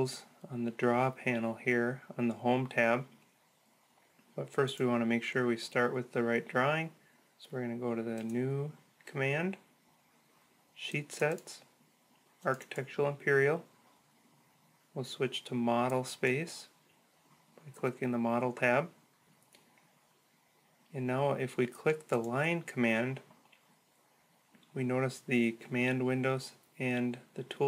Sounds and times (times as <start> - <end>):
Speech: 0.0 - 3.2, 4.4 - 9.7, 10.8 - 11.7, 12.4 - 13.7, 15.0 - 16.8, 17.6 - 19.0, 20.9 - 23.3, 24.7 - 27.6.